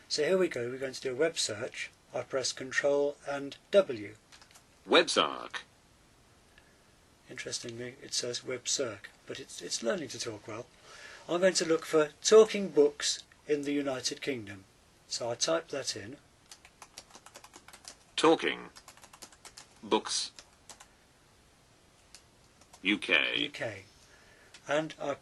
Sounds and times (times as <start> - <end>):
Computer keyboard: 4.3 - 4.7, 16.4 - 18.1, 18.7 - 20.9, 22.1 - 22.9.